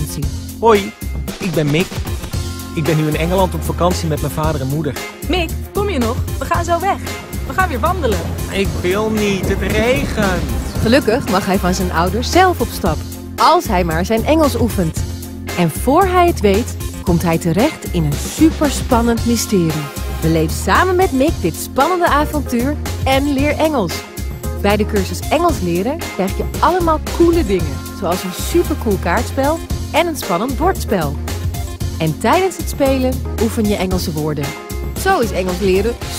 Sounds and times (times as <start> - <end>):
Speech: 0.0 - 2.0, 2.8 - 15.0, 15.6 - 24.0, 24.6 - 31.2, 32.0 - 36.1
Music: 0.0 - 36.1.